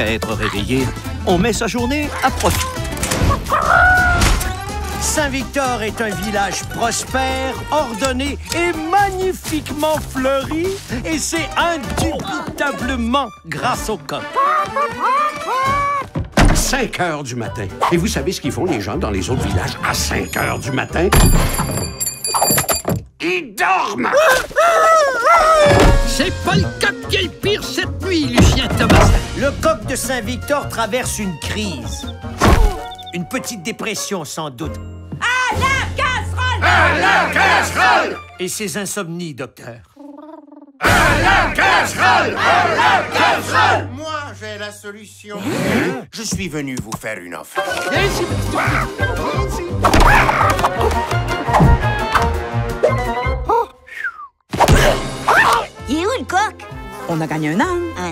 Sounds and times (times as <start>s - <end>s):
Speech: 0.0s - 2.6s, 5.0s - 14.2s, 16.6s - 21.1s, 23.2s - 24.4s, 26.1s - 32.0s, 33.1s - 36.7s, 43.9s - 49.7s, 55.9s - 58.1s
Music: 0.0s - 22.1s, 25.5s - 39.0s, 40.9s - 45.3s, 47.6s - 53.7s, 54.6s - 58.1s.